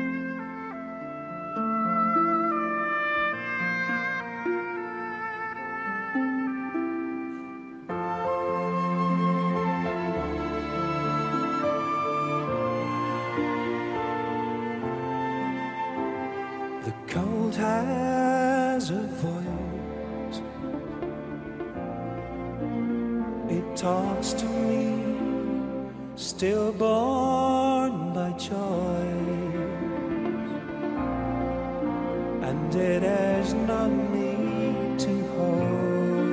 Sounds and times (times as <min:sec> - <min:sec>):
Orchestra: 0:00.0 - 0:36.3.